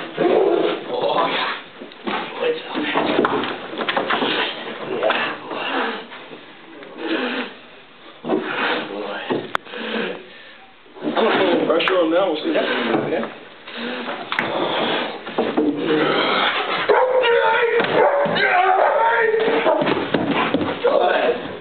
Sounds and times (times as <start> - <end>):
Speech: 11.2 - 13.4, 17.2 - 19.7, 20.8 - 21.5.